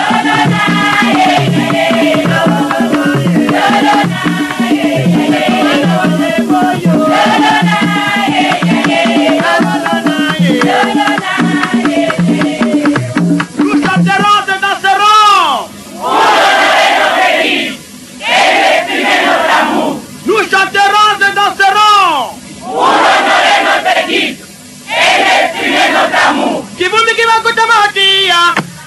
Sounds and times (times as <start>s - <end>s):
Music: 0.0s - 14.4s
Speech: 13.7s - 15.7s, 20.3s - 22.4s, 26.8s - 28.6s.